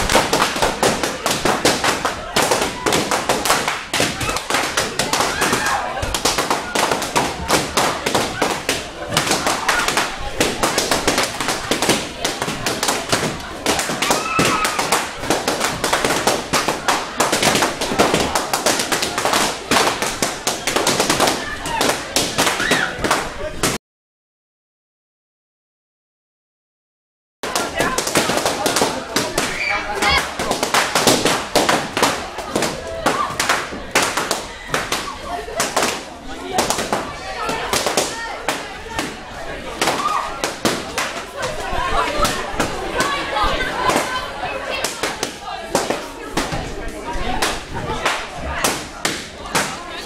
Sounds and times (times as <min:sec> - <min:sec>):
Speech: 0:00.8 - 0:23.8, 0:27.4 - 0:31.0, 0:31.8 - 0:50.0.